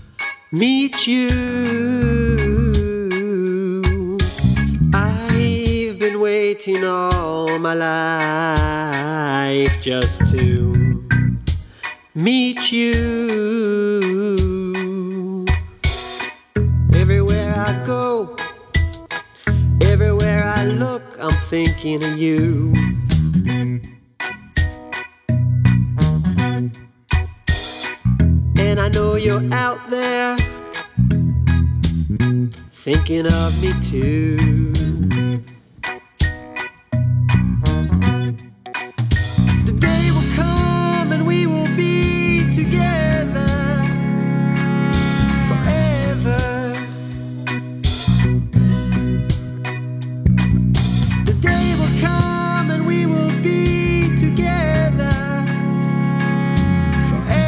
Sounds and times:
Music: 0.0 - 57.4.

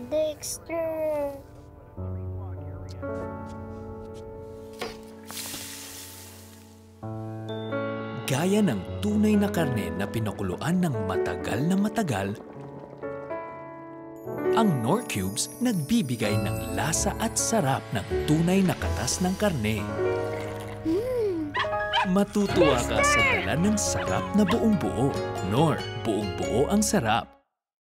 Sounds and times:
Music: 0.0 - 27.6
Speech: 22.1 - 27.3.

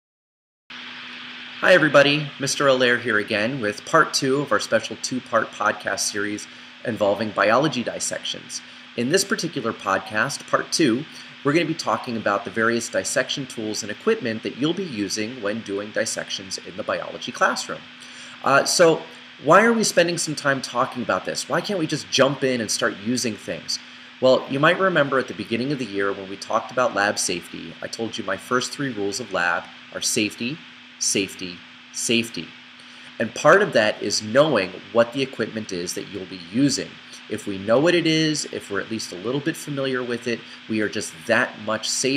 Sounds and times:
Speech: 1.6 - 32.6, 33.2 - 42.1.

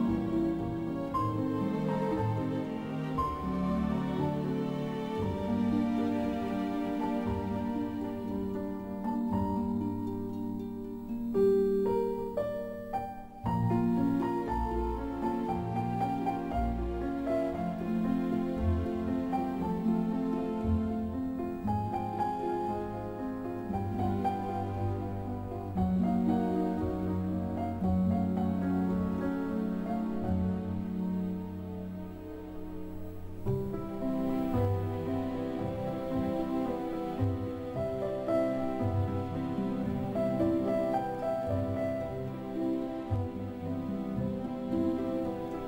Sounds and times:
Tender music: 0.0 - 45.6.

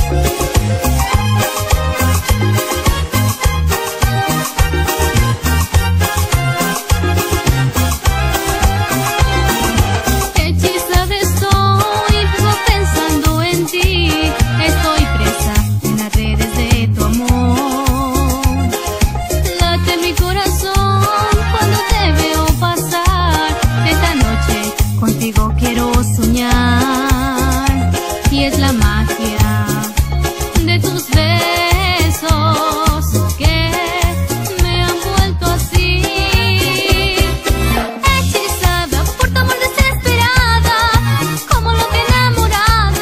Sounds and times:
Music: 0.0 - 43.0.

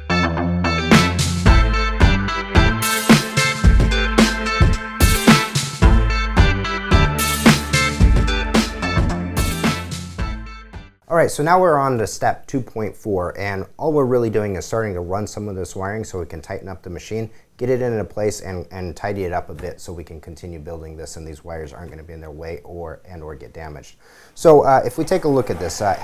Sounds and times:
Speech: 11.1 - 26.0.

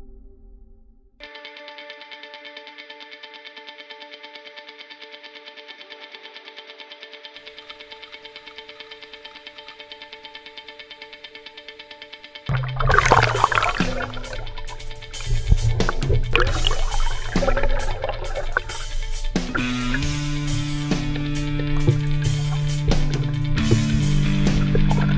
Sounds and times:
Music: 0.0 - 25.1
Gurgling: 12.5 - 25.1.

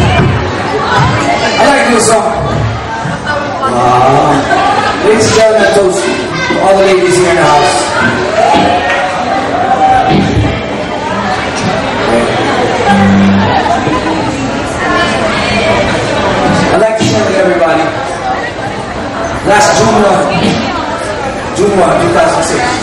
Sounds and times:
Chatter: 0.0 - 22.8
Inside, large room or hall: 0.0 - 22.8.

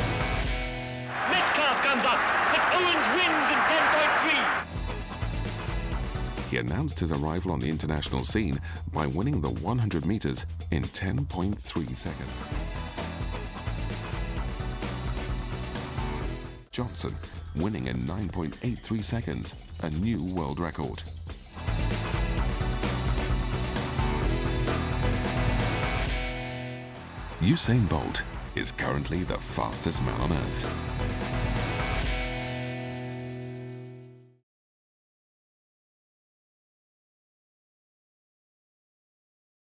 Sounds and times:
Music: 0.0 - 34.4
Speech: 1.2 - 4.6, 6.5 - 12.4, 16.7 - 21.1, 27.4 - 30.8.

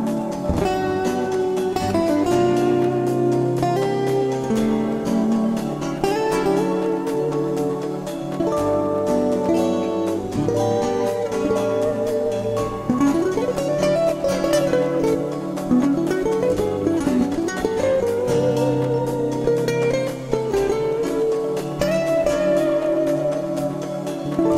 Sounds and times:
Mandolin: 0.0 - 24.5.

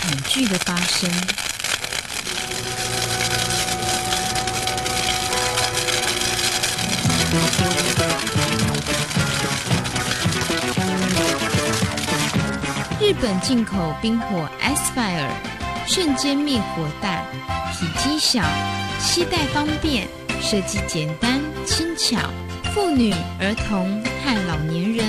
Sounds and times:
Speech: 0.0 - 1.4, 13.0 - 25.0
Music: 1.9 - 25.0.

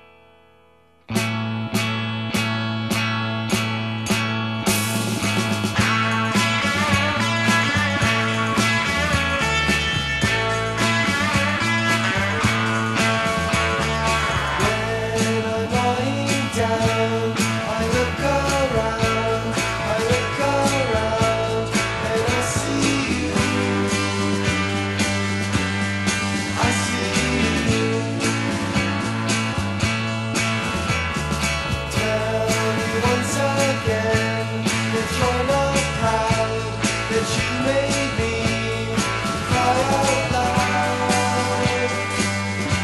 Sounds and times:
Music: 0.0 - 42.8.

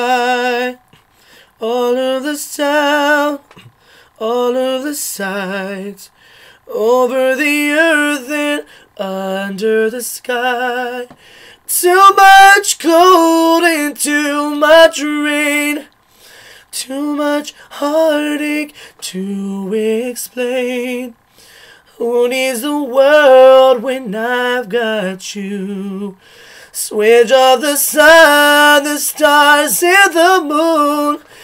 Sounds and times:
Male singing: 0.0 - 0.9, 1.6 - 3.6, 4.2 - 15.9, 16.7 - 21.2, 22.0 - 31.4.

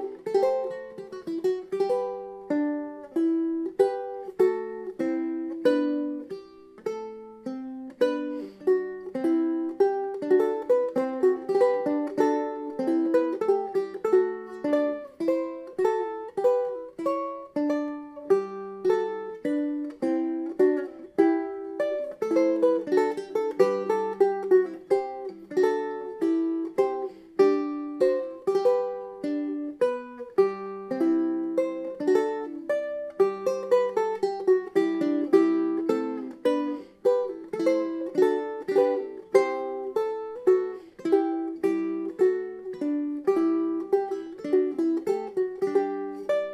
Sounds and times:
Strum: 0.0 - 46.5.

